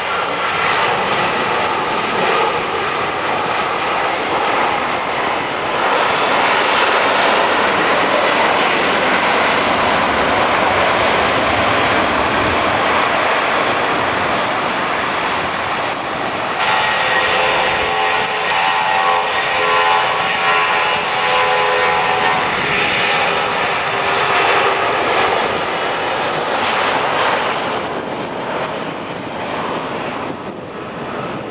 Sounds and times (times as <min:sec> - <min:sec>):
Aircraft engine: 0:00.0 - 0:31.5
Outside, urban or manmade: 0:00.0 - 0:31.5.